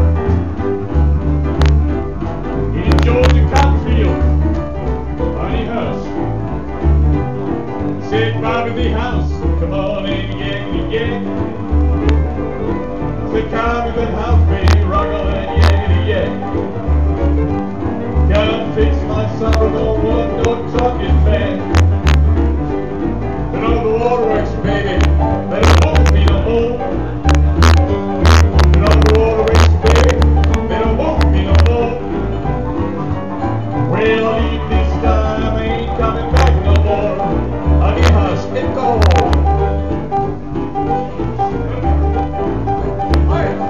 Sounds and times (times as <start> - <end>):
Music: 0.0 - 43.6
Male singing: 2.7 - 4.2, 5.3 - 6.1, 8.0 - 11.5, 13.3 - 16.4, 18.3 - 21.8, 23.6 - 27.0, 28.8 - 32.2, 33.9 - 39.5, 43.2 - 43.6.